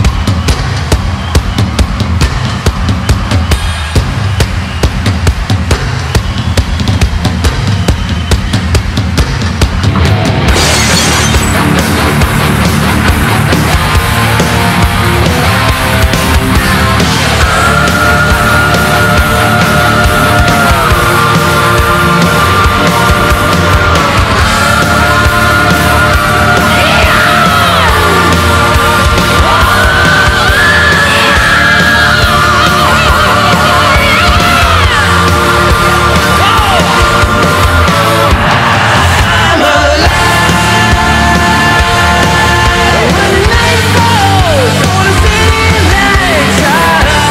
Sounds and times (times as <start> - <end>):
Music: 0.0 - 47.3.